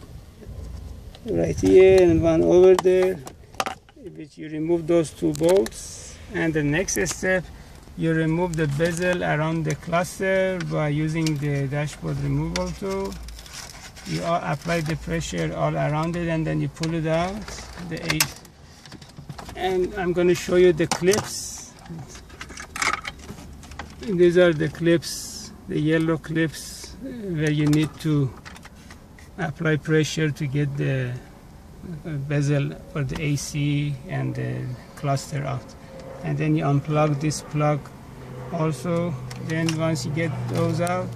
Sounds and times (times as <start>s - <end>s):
Speech: 1.2s - 3.3s, 4.0s - 13.2s, 14.1s - 18.4s, 19.6s - 22.2s, 24.0s - 28.3s, 29.4s - 31.3s, 31.9s - 37.8s, 38.6s - 41.1s.